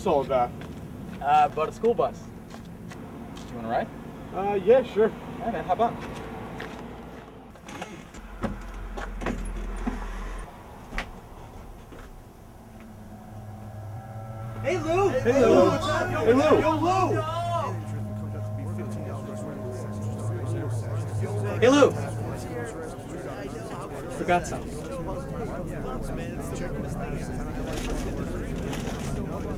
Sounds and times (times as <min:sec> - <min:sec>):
Outside, urban or manmade: 0:00.0 - 0:29.5
Music: 0:08.0 - 0:29.5.